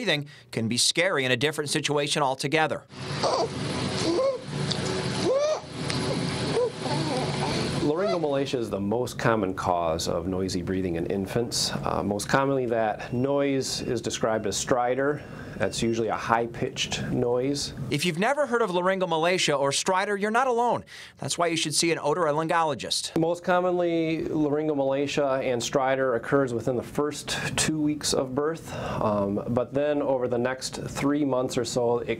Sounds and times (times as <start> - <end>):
Speech: 0.0 - 2.9, 6.9 - 32.1.